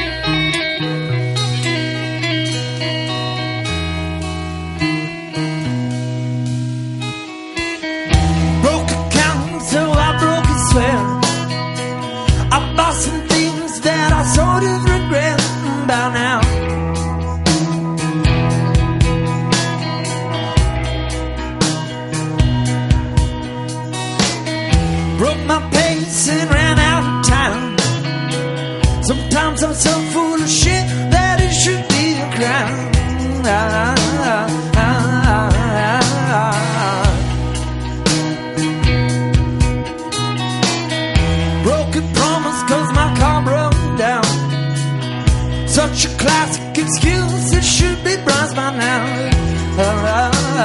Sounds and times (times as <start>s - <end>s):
Music: 0.0s - 50.6s.